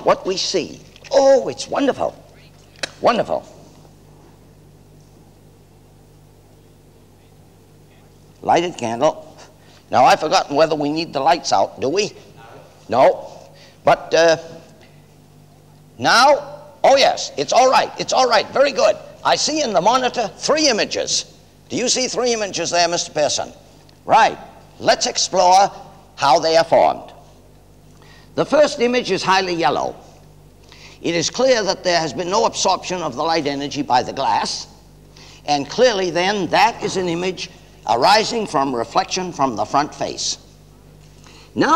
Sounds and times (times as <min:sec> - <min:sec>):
Speech: 0:00.0 - 0:02.2, 0:02.9 - 0:03.6, 0:07.2 - 0:09.3, 0:09.9 - 0:14.6, 0:16.0 - 0:27.2, 0:28.4 - 0:30.0, 0:31.0 - 0:34.8, 0:35.5 - 0:40.5.